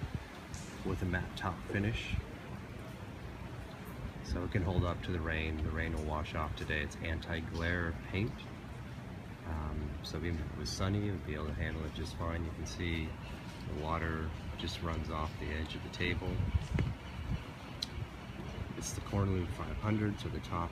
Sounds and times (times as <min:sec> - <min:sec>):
Speech: 0:00.8 - 0:02.3, 0:04.2 - 0:08.5, 0:09.4 - 0:16.5, 0:18.8 - 0:20.7.